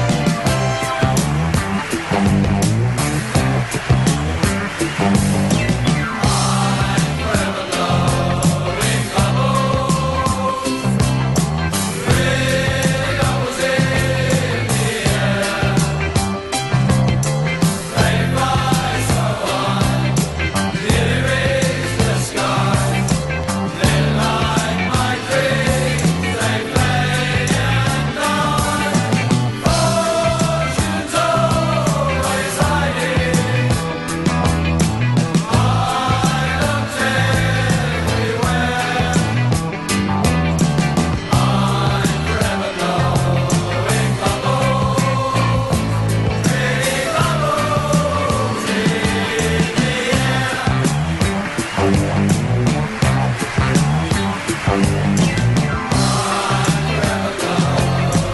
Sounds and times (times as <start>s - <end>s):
Music: 0.0s - 58.3s.